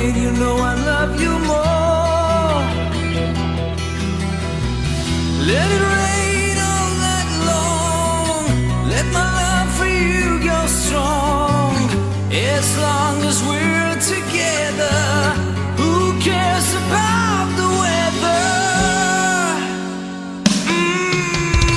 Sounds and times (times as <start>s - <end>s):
Music: 0.0s - 21.7s.